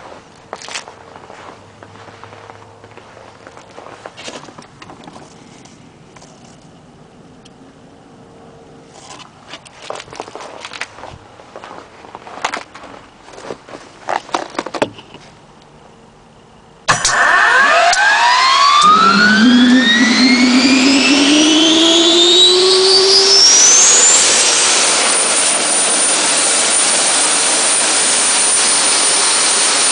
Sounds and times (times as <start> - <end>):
Vehicle: 0.0 - 29.9
Engine starting: 16.9 - 19.8.